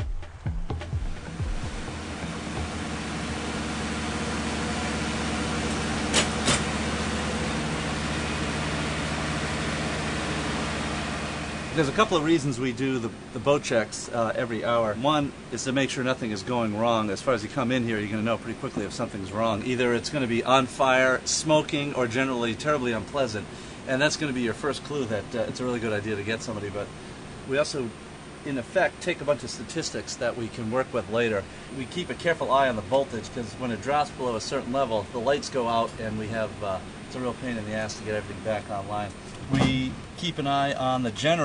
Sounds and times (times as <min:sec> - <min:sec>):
Heavy engine (low frequency): 0:01.1 - 0:41.4
Speech: 0:11.8 - 0:26.9, 0:27.5 - 0:41.4.